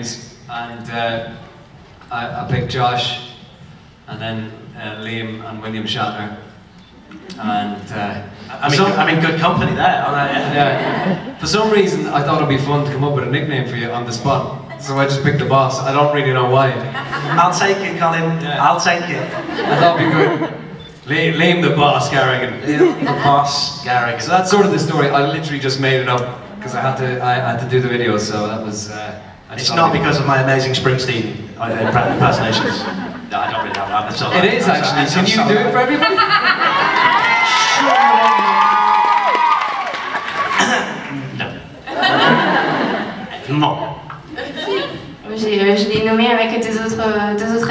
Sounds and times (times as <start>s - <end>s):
Speech: 2.1s - 3.2s, 7.3s - 16.8s, 21.1s - 36.1s.